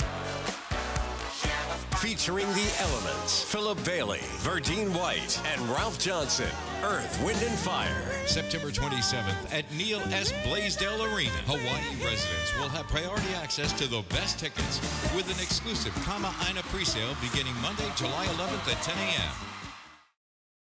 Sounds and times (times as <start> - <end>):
Music: 0.0 - 20.2
Speech: 2.0 - 19.4.